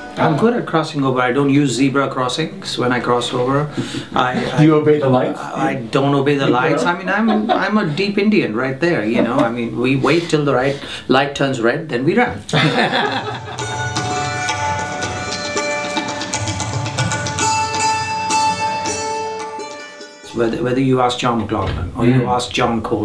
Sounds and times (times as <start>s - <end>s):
Music: 0.0s - 2.0s, 12.6s - 22.1s
Speech: 0.2s - 12.6s, 20.3s - 23.0s.